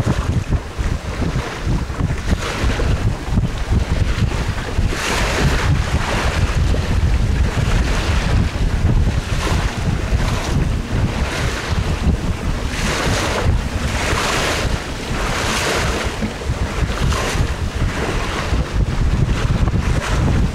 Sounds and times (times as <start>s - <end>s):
Sailboat, sailing ship: 0.0s - 20.5s
Waves, surf: 0.0s - 20.5s
Wind noise (microphone): 0.0s - 20.5s.